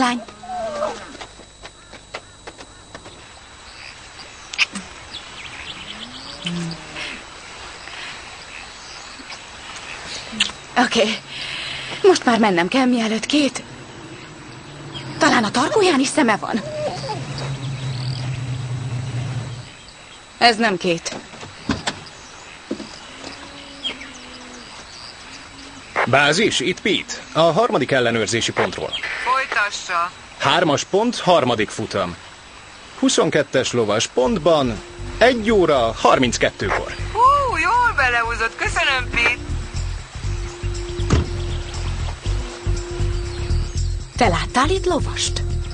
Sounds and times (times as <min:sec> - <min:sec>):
Bird: 0:03.8 - 0:07.2, 0:21.6 - 0:26.2.